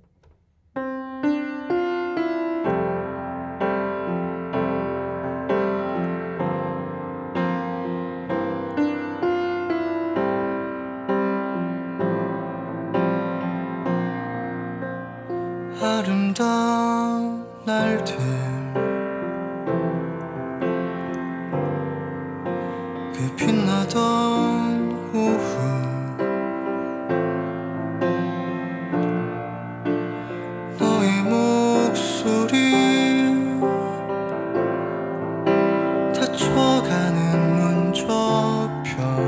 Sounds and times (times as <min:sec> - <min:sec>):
Music: 0:00.0 - 0:39.2.